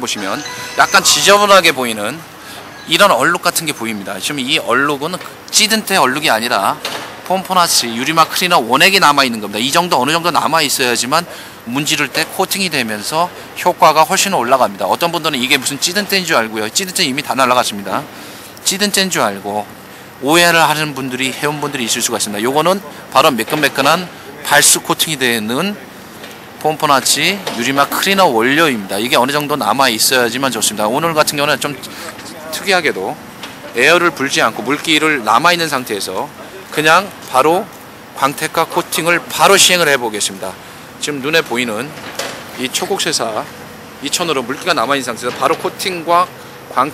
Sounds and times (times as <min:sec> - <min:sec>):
Speech: 0:00.0 - 0:02.3, 0:02.9 - 0:26.0, 0:26.6 - 0:46.9.